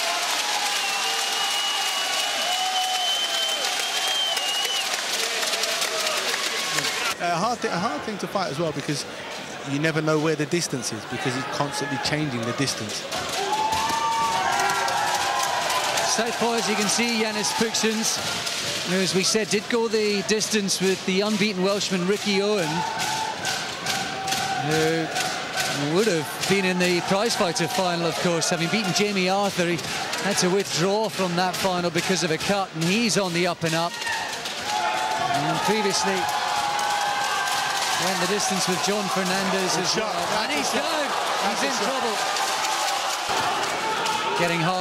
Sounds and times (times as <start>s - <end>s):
Speech: 7.2s - 9.1s, 9.7s - 13.0s, 16.0s - 18.2s, 18.9s - 22.8s, 24.6s - 25.1s, 25.8s - 34.0s, 35.3s - 36.3s, 38.0s - 42.2s, 44.4s - 44.8s.